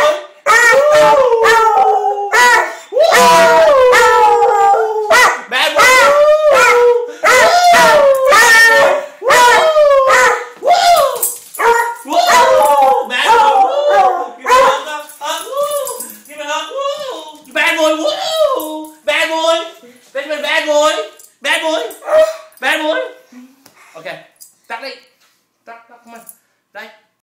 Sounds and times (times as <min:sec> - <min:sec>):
Speech: 0:12.1 - 0:22.0, 0:25.7 - 0:27.1.